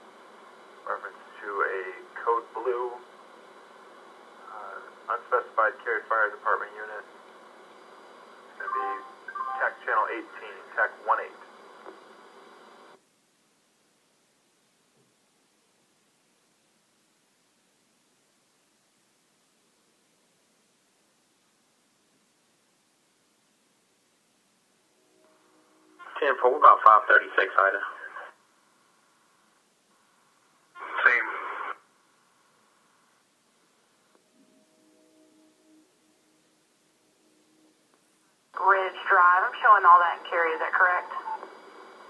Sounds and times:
Radio: 0:00.8 - 0:03.1, 0:04.4 - 0:07.2, 0:08.5 - 0:13.0, 0:26.0 - 0:28.4, 0:30.0 - 0:31.9, 0:38.6 - 0:42.1
Speech: 0:00.9 - 0:03.0, 0:04.4 - 0:07.1, 0:08.6 - 0:11.5, 0:26.1 - 0:28.4, 0:30.8 - 0:31.8, 0:38.6 - 0:41.4.

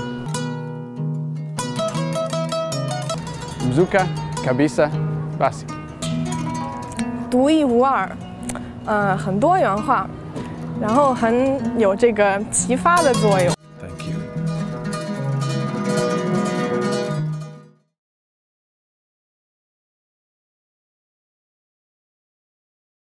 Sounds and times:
Music: 0:00.0 - 0:18.0.

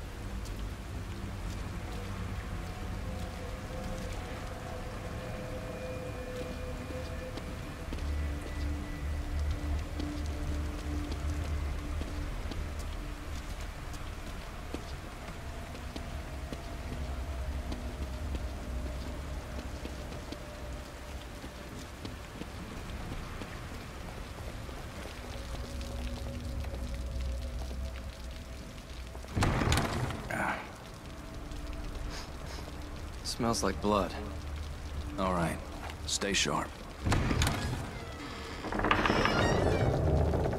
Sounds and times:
Run: 0:06.3 - 0:29.2.

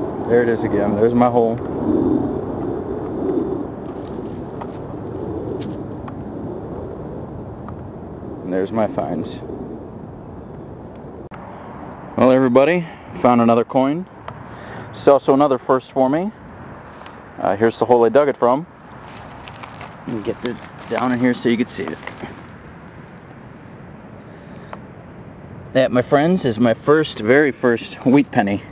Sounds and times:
Speech: 0:00.3 - 0:01.6, 0:08.5 - 0:09.4, 0:12.2 - 0:14.1, 0:15.0 - 0:16.4, 0:17.4 - 0:18.7, 0:20.1 - 0:22.3, 0:25.8 - 0:28.7.

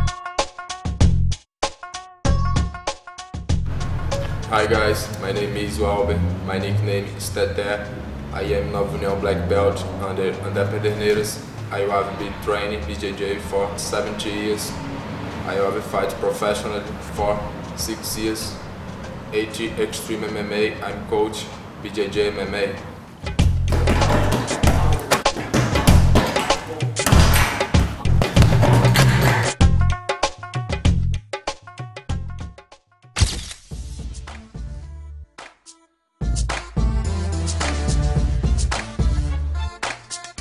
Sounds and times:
Speech: 0:04.5 - 0:14.8, 0:15.5 - 0:18.6, 0:19.3 - 0:22.8, 0:23.8 - 0:25.2.

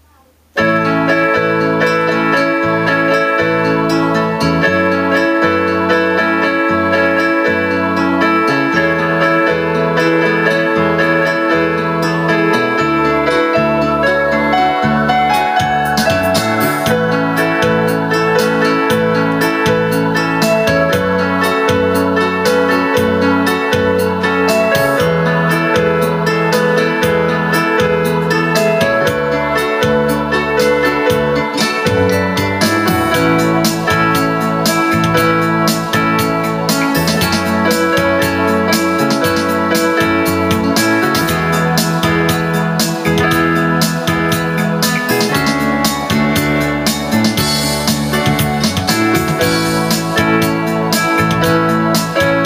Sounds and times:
Music: 0:00.0 - 0:52.4.

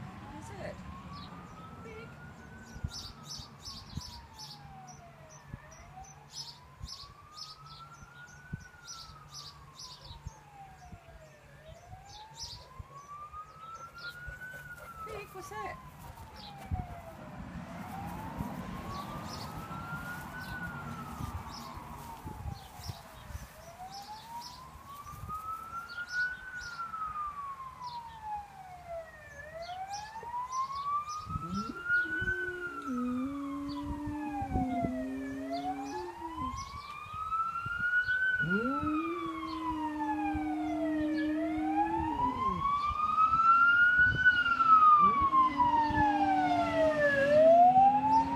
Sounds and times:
Police car (siren): 0:00.0 - 0:48.3.

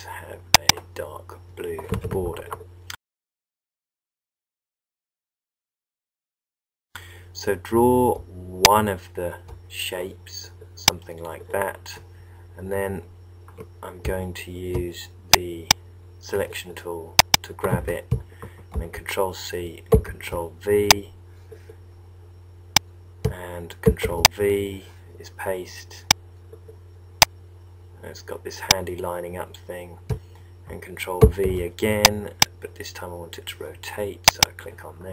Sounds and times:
Speech: 0:00.0 - 0:02.6, 0:07.4 - 0:13.1, 0:13.8 - 0:18.2, 0:18.8 - 0:21.2, 0:23.3 - 0:26.1, 0:28.0 - 0:30.0, 0:30.7 - 0:35.1.

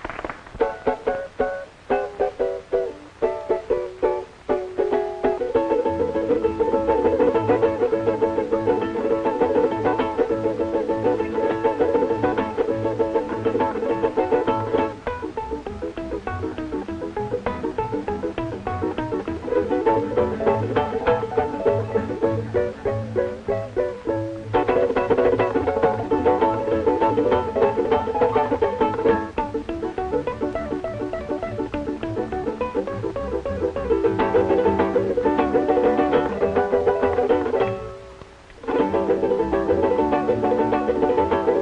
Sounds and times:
Ukulele: 0:00.0 - 0:41.6.

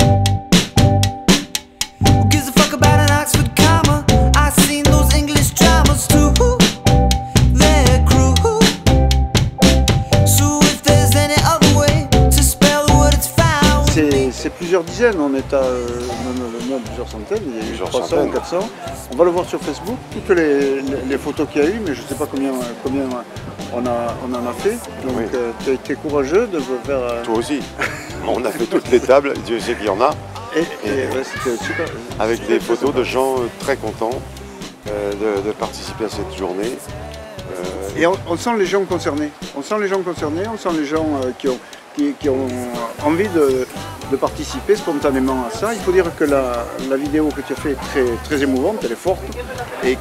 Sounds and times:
Music: 0:00.0 - 0:50.0
Speech: 0:13.9 - 0:34.3, 0:34.9 - 0:50.0.

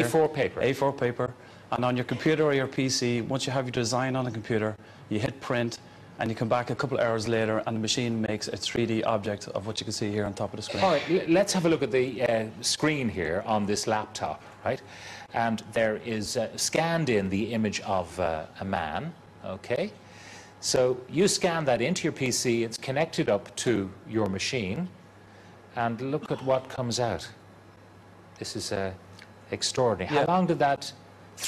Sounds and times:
Speech: 0:00.0 - 0:20.0, 0:20.6 - 0:25.0, 0:25.7 - 0:27.4, 0:28.4 - 0:31.4.

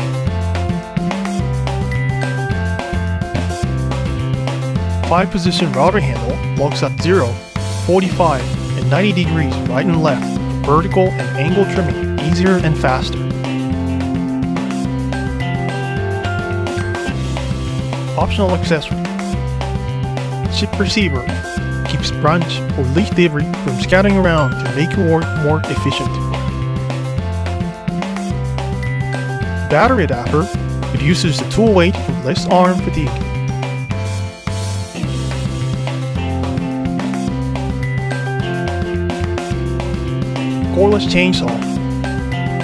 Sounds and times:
Music: 0:00.0 - 0:42.6
Speech: 0:05.1 - 0:13.2, 0:18.2 - 0:19.0, 0:20.5 - 0:26.2, 0:29.7 - 0:33.2, 0:40.7 - 0:41.7.

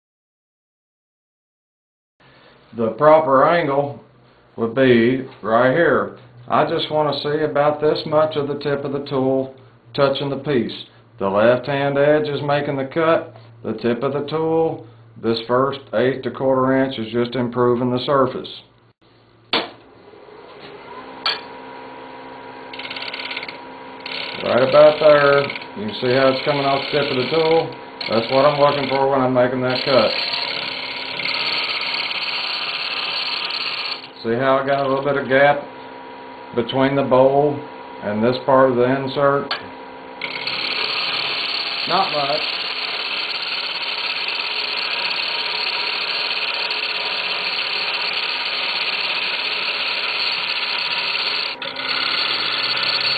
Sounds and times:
Speech: 0:02.8 - 0:04.0, 0:04.6 - 0:18.7, 0:24.4 - 0:30.2, 0:34.2 - 0:35.7, 0:36.5 - 0:39.5, 0:41.9 - 0:42.5.

